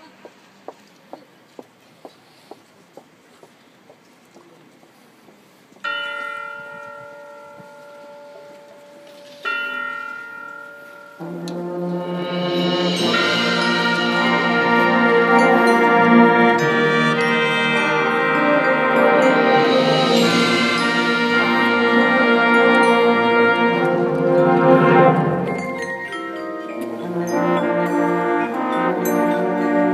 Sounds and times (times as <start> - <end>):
Church bell: 5.8 - 29.9.